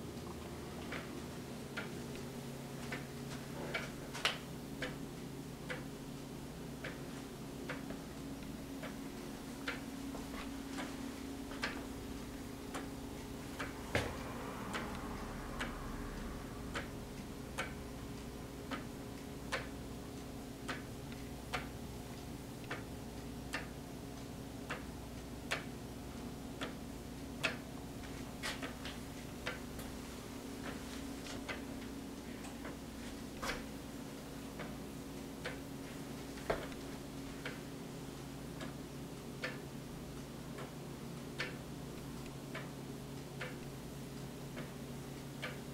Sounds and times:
Tick-tock: 2.9s - 5.9s, 6.8s - 7.1s, 7.7s - 9.0s, 9.6s - 10.9s, 11.5s - 30.0s, 33.4s - 45.7s.

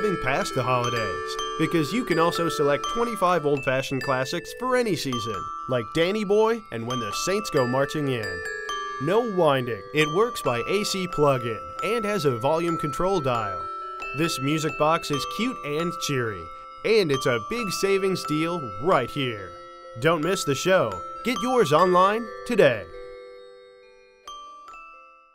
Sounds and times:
Glockenspiel: 0.0s - 25.3s
Marimba, xylophone: 0.0s - 25.3s.

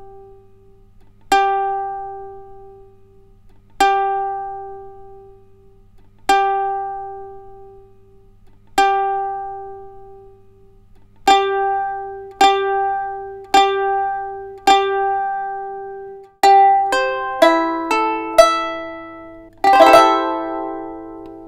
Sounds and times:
Guitar: 16.8s - 21.4s.

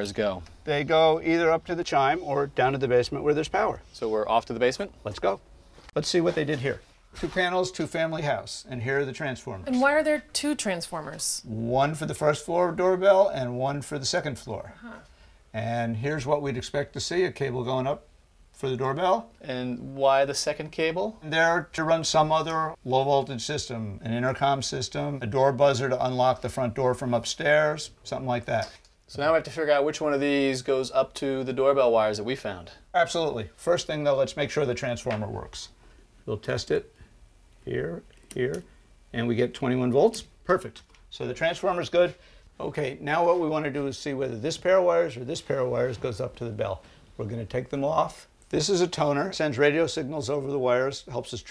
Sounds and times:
Speech: 6.0s - 14.7s, 18.6s - 36.9s, 39.2s - 51.5s.

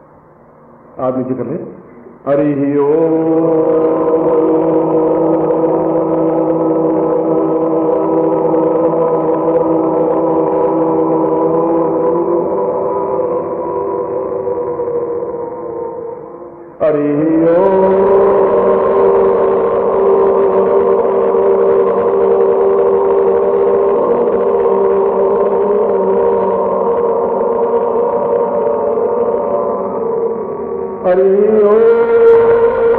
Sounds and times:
Mantra: 2.2s - 32.9s.

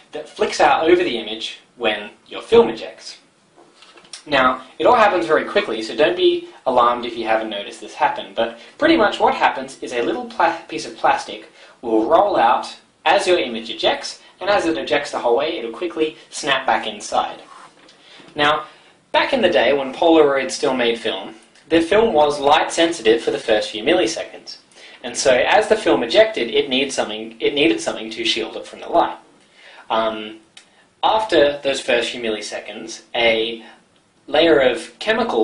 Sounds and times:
Speech: 0.0s - 3.3s, 4.2s - 17.6s, 18.3s - 35.4s.

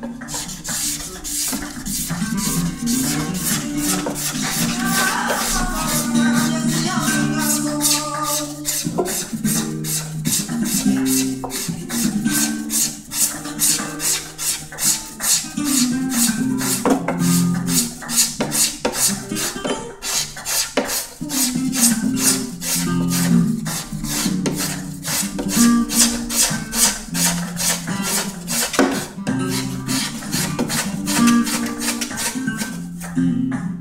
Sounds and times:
Strum: 0.0s - 33.8s.

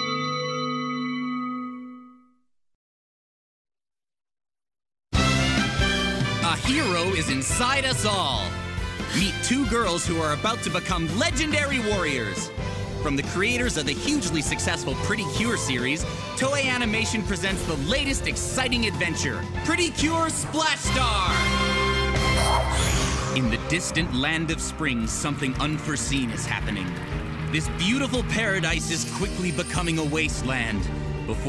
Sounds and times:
Music: 0.0s - 2.5s, 5.1s - 31.4s
Speech: 6.4s - 8.5s, 9.1s - 21.5s, 23.4s - 31.4s.

